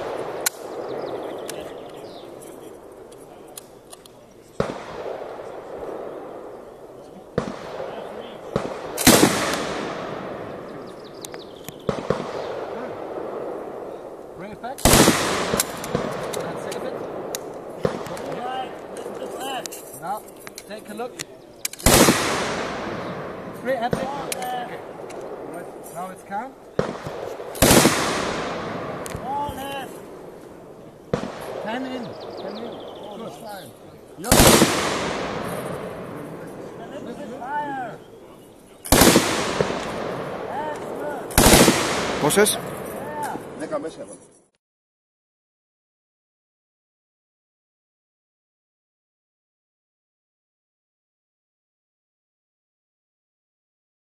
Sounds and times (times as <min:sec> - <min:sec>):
Fireworks: 0:04.5 - 0:13.9, 0:14.8 - 0:20.7, 0:21.8 - 0:25.9, 0:26.7 - 0:30.3, 0:31.1 - 0:37.1, 0:38.9 - 0:44.2.